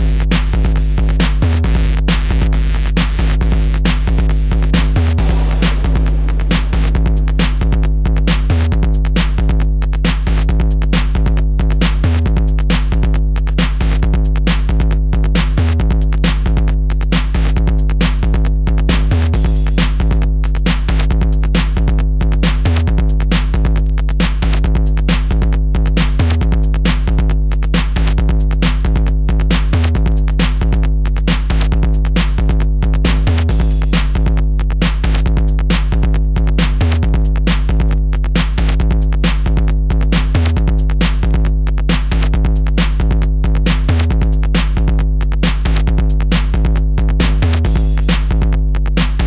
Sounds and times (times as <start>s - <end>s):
Electronic dance music: 0.0s - 49.2s.